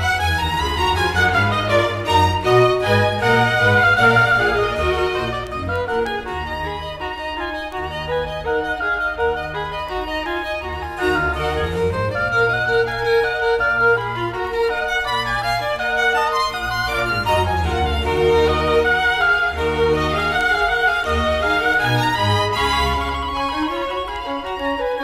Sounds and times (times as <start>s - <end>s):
Violin, fiddle: 0.0s - 25.0s.